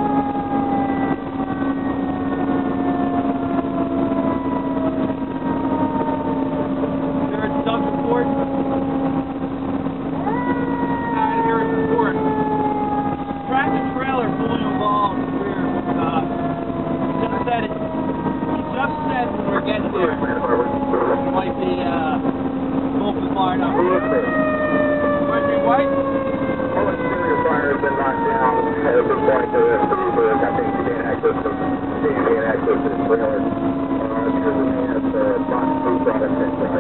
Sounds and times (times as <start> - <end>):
Emergency vehicle: 0.0 - 36.8
Speech: 7.3 - 8.4, 11.2 - 12.2, 13.4 - 16.3, 17.2 - 17.8, 18.6 - 22.2, 23.0 - 24.4, 25.2 - 25.9, 26.7 - 36.8.